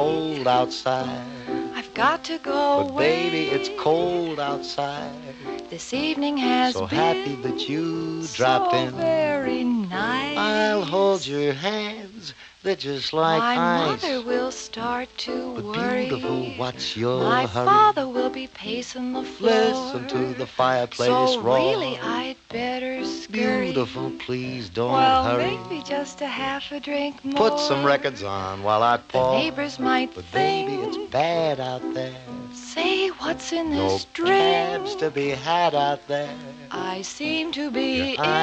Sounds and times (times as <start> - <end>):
Music: 0.0 - 38.4.